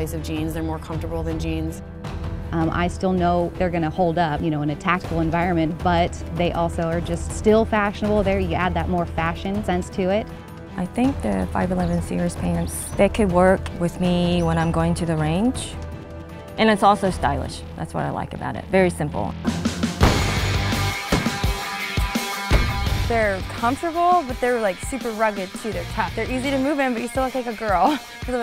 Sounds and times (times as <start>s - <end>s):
Speech: 0.0s - 1.8s, 2.6s - 10.2s, 10.8s - 15.8s, 16.6s - 19.4s, 23.1s - 28.4s
Music: 0.0s - 28.4s.